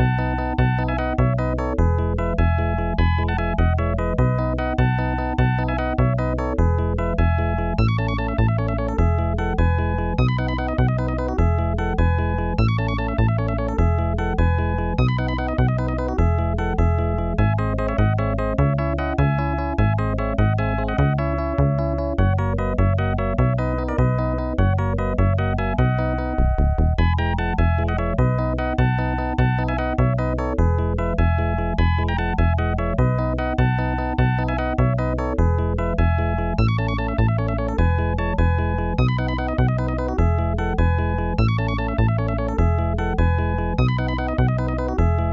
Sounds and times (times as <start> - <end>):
Funny music: 0.0 - 45.3.